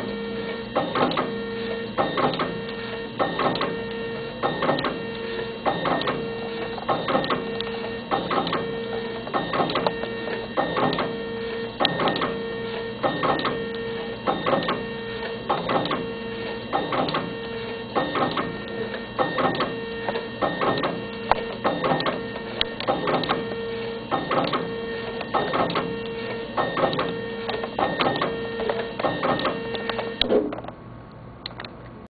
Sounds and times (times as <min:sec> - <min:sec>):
Printer: 0:00.0 - 0:30.8.